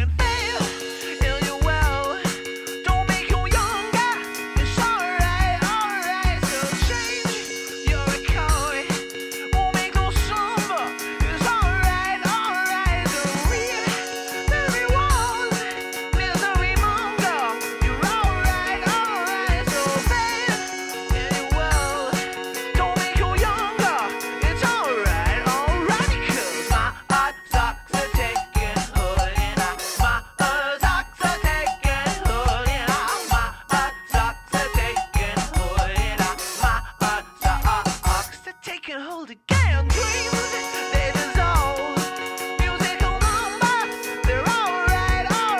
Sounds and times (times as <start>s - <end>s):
Background music: 0.0s - 45.5s.